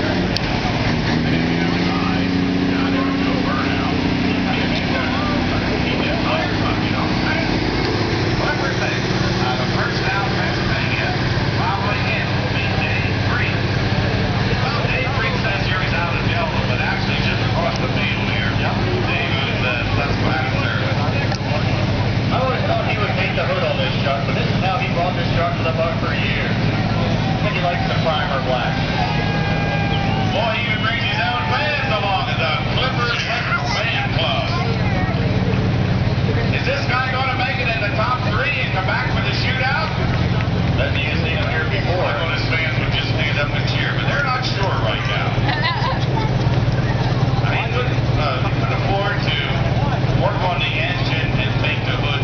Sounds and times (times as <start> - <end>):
Speech: 0.0 - 52.2
Vehicle: 0.0 - 52.2.